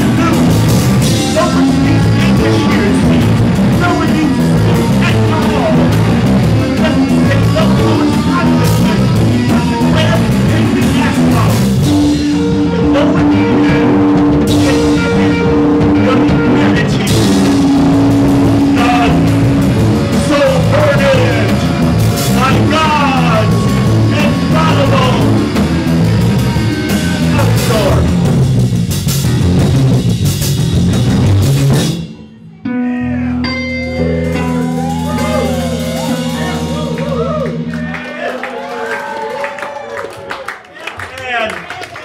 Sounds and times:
Punk rock: 0.0 - 32.2.

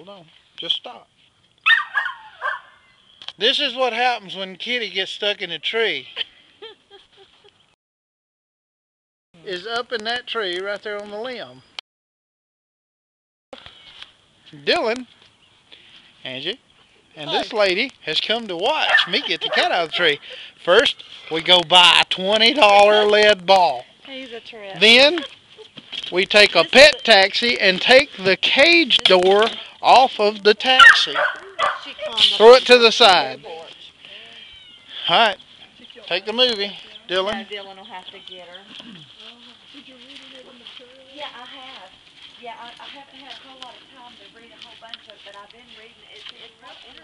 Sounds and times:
Meow: 34.3 - 35.0.

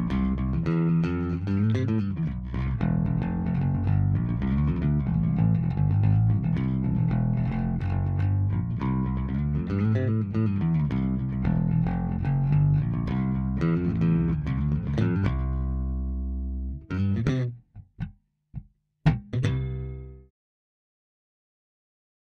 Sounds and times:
Music: 0.0 - 20.3.

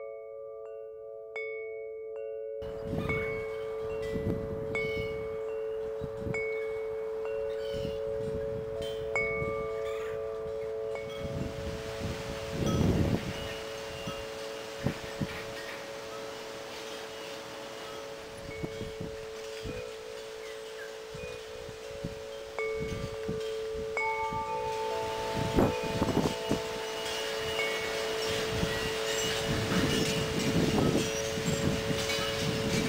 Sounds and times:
Music: 0.0 - 14.4
Wind: 0.0 - 32.8.

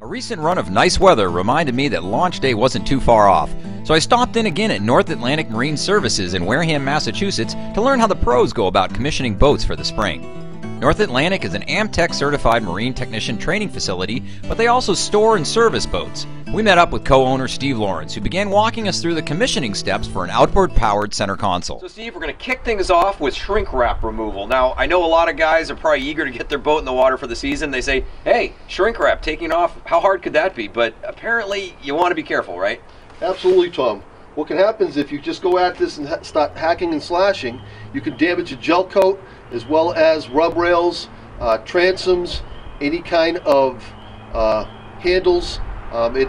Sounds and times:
Speech: 0.0 - 10.2, 10.8 - 46.2
Music: 0.0 - 21.8.

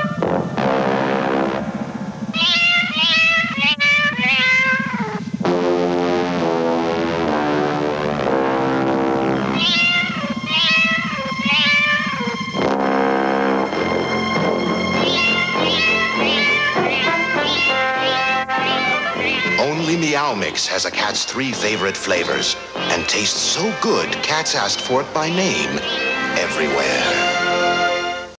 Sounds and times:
Meow: 0.0 - 0.2, 2.3 - 5.3, 9.5 - 12.4, 15.0 - 20.2, 21.6 - 23.4, 25.2 - 27.3
Music: 0.0 - 28.3
Speech: 19.6 - 25.8, 26.4 - 27.3.

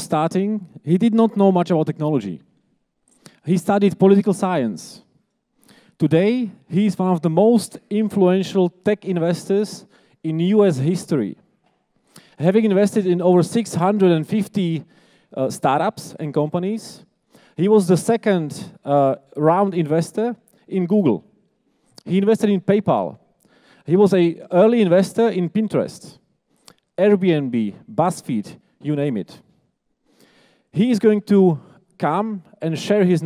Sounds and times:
Speech: 0.0 - 2.5, 3.4 - 5.1, 6.0 - 11.4, 12.4 - 21.3, 22.0 - 23.2, 23.9 - 26.2, 27.0 - 29.5, 30.8 - 33.2.

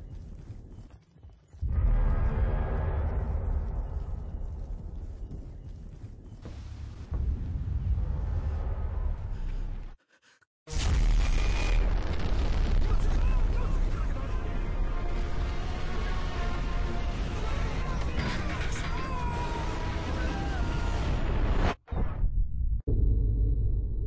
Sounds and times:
Screaming: 17.8 - 21.3.

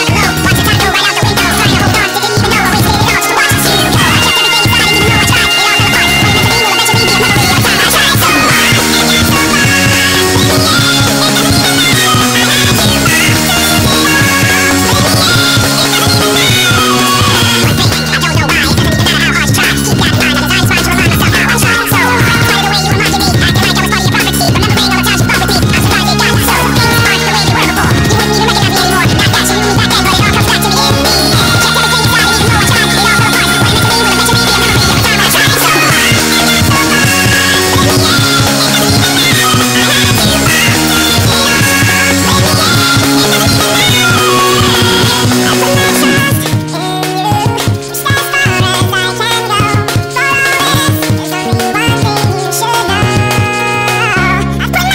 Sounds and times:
Music: 0.0 - 54.9.

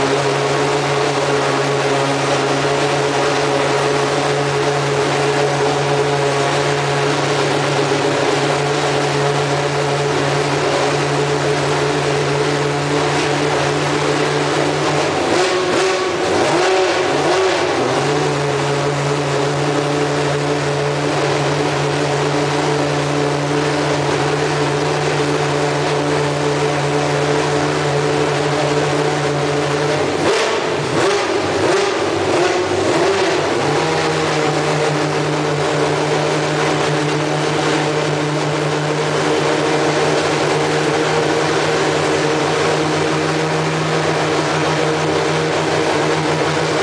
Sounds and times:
Vehicle: 0.0 - 46.8
Accelerating, revving, vroom: 15.3 - 18.3, 30.2 - 34.4.

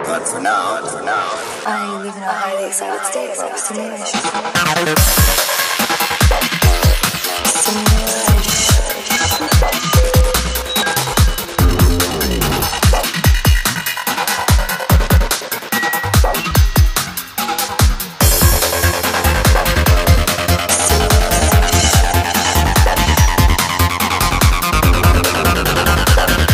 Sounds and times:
Speech: 0.0 - 4.3, 7.4 - 9.2
Trance music: 4.2 - 13.8, 18.2 - 26.5
Drum and bass: 4.6 - 26.5.

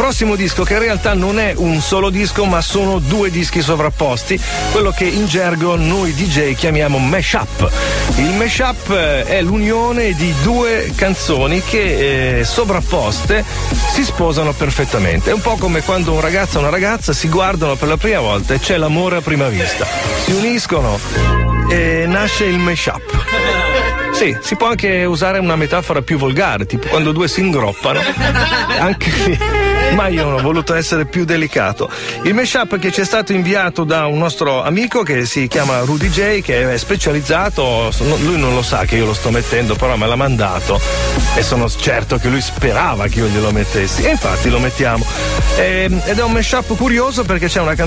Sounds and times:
Speech: 0.0 - 21.1, 21.7 - 28.2, 28.8 - 47.8
Music: 0.0 - 47.8.

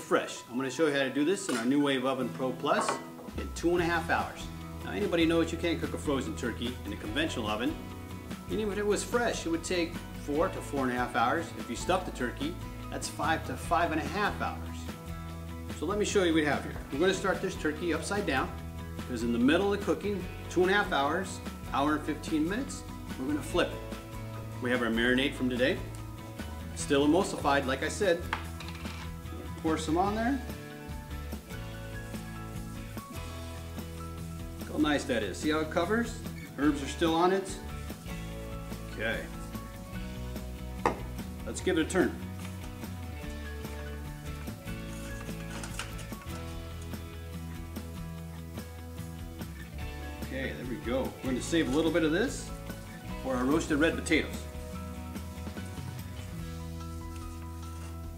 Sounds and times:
Speech: 0.0 - 7.8, 8.5 - 14.8, 15.8 - 23.8, 24.6 - 25.9, 26.8 - 28.2, 29.6 - 30.5, 34.7 - 37.6, 38.9 - 39.4, 41.5 - 42.2, 50.3 - 52.5, 53.2 - 54.4
Music: 0.0 - 58.1.

